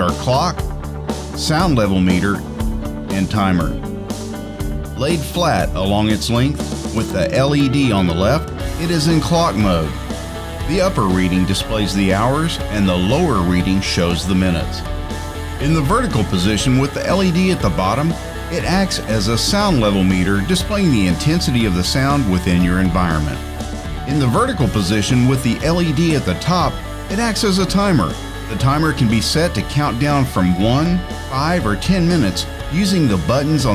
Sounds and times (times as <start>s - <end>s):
Speech: 0.0s - 0.6s, 1.4s - 2.5s, 3.1s - 3.8s, 5.0s - 10.0s, 10.7s - 14.9s, 15.6s - 23.4s, 24.1s - 33.7s
Music: 0.0s - 33.7s.